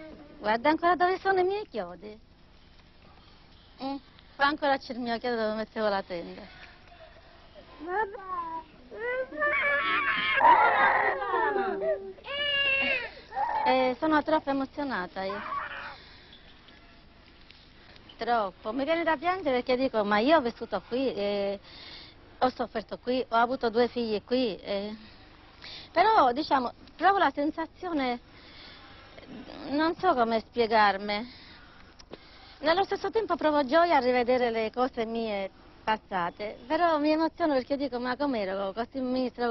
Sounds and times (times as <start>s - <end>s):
Crying, sobbing: 7.9s - 13.8s, 15.3s - 16.0s.